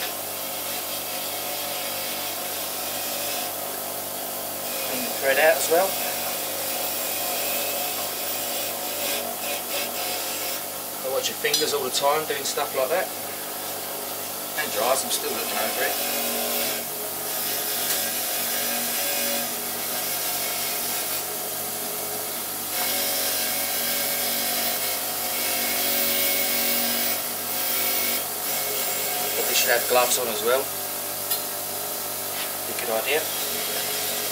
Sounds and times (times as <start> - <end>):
Power tool: 0.0 - 34.3.